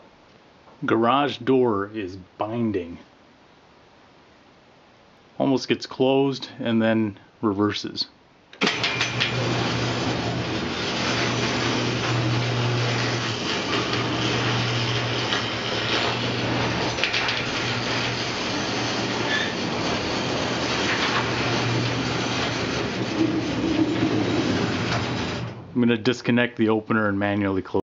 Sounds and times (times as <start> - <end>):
Speech: 0.8 - 3.1, 5.4 - 8.2, 25.8 - 27.8.